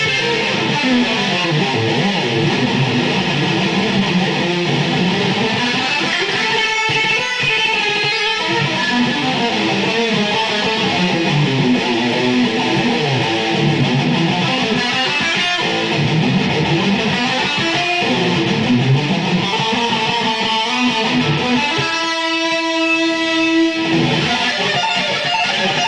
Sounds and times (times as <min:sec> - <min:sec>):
Bass guitar: 0:00.0 - 0:25.8
Electric guitar: 0:00.0 - 0:25.8.